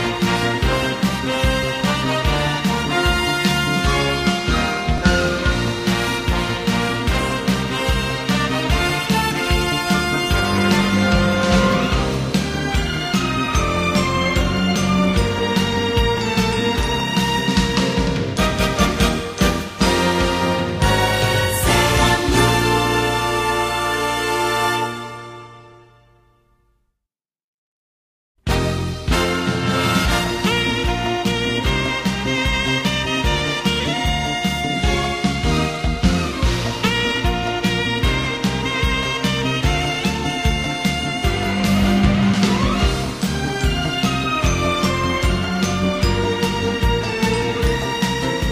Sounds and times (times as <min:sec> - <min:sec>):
Soundtrack music: 0:00.0 - 0:26.2, 0:28.5 - 0:48.5.